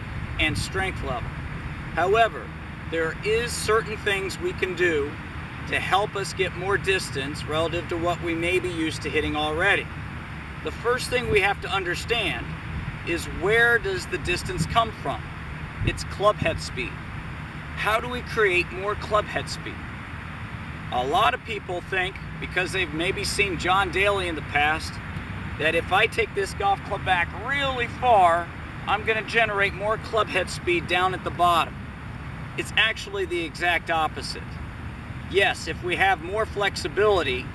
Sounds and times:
Speech: 0:00.4 - 0:01.2, 0:02.0 - 0:09.9, 0:10.6 - 0:12.5, 0:13.1 - 0:15.2, 0:15.9 - 0:17.0, 0:17.8 - 0:19.8, 0:20.9 - 0:25.0, 0:25.6 - 0:31.8, 0:32.6 - 0:34.6, 0:35.3 - 0:37.5.

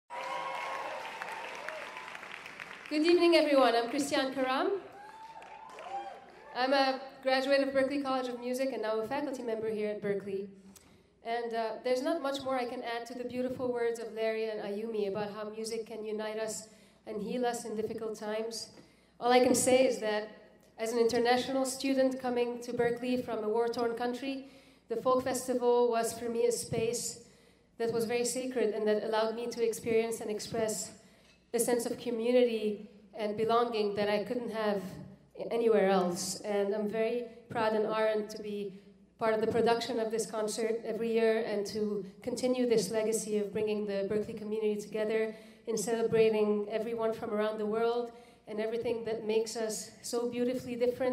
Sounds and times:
Female speech, woman speaking: 0:02.9 - 0:04.8, 0:06.6 - 0:10.5, 0:11.3 - 0:27.2, 0:27.8 - 0:30.9, 0:31.6 - 0:51.1.

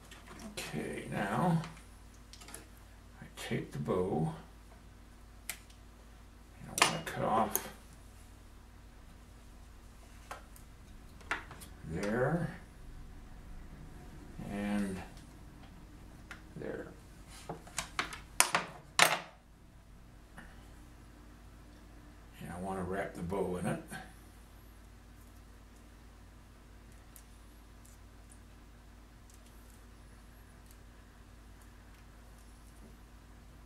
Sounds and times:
Inside, small room: 0:00.0 - 0:33.6
Speech: 0:00.4 - 0:01.8, 0:03.2 - 0:04.5, 0:06.6 - 0:07.8, 0:11.8 - 0:12.7, 0:14.4 - 0:15.2, 0:16.6 - 0:17.0, 0:22.4 - 0:24.1.

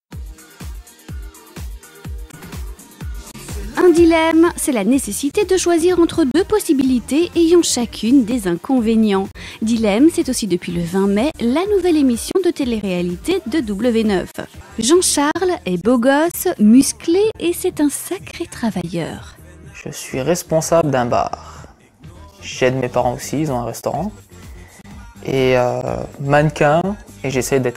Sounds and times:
Music: 0:00.1 - 0:27.7
Speech: 0:03.6 - 0:21.5, 0:22.4 - 0:24.2, 0:25.2 - 0:27.7.

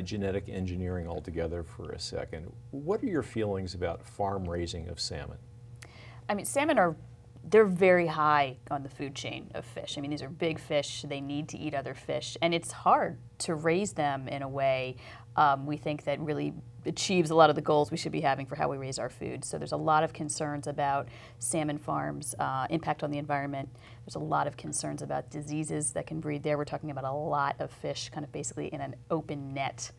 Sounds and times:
Female speech, woman speaking: 0:06.3 - 0:29.9.

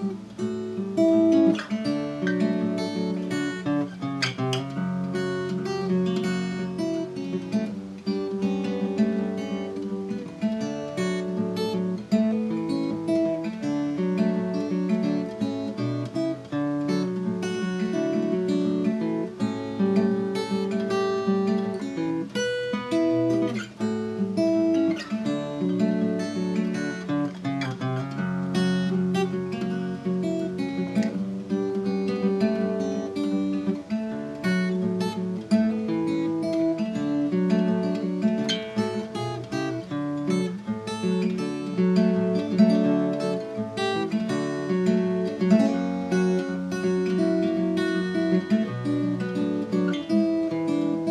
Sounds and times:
Acoustic guitar: 0:00.0 - 0:51.1.

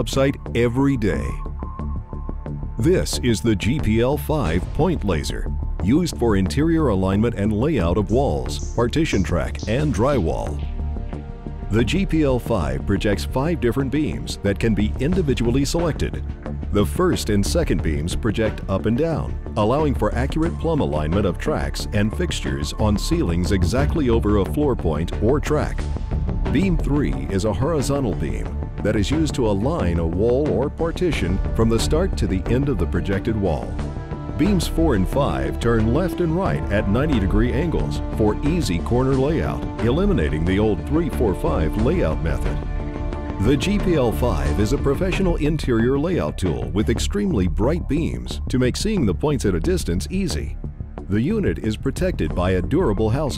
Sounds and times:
Speech: 0:00.0 - 0:01.4, 0:02.8 - 0:10.7, 0:11.7 - 0:25.8, 0:26.5 - 0:33.8, 0:34.4 - 0:42.6, 0:43.4 - 0:53.3
Music: 0:00.0 - 0:53.3.

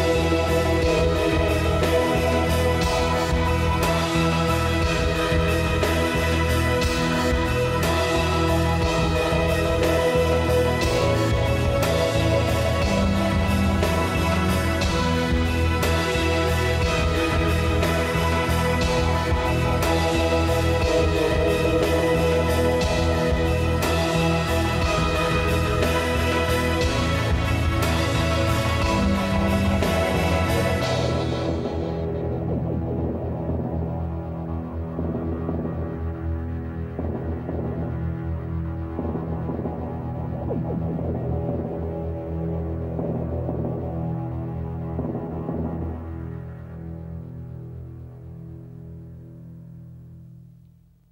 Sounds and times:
Music: 0:00.0 - 0:51.1.

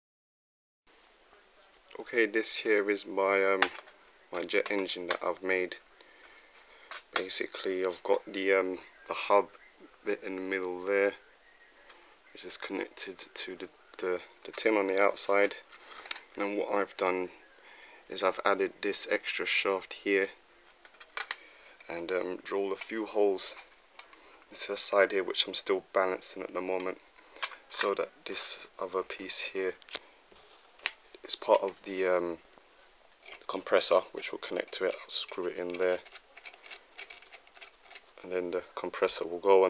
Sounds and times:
Speech: 0:01.3 - 0:05.8, 0:07.1 - 0:11.3, 0:12.3 - 0:15.6, 0:16.4 - 0:17.4, 0:18.1 - 0:20.4, 0:21.8 - 0:23.6, 0:24.5 - 0:27.0, 0:27.7 - 0:29.8, 0:31.2 - 0:32.4, 0:33.4 - 0:36.0, 0:38.2 - 0:39.6.

